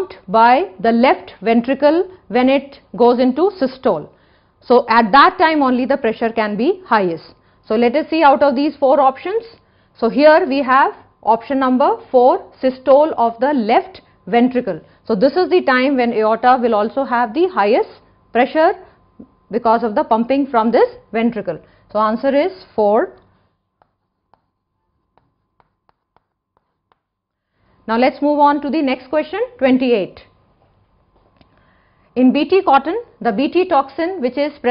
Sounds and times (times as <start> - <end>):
Speech: 0.0 - 4.1, 4.7 - 18.8, 19.5 - 23.2, 27.9 - 30.3, 32.2 - 34.7.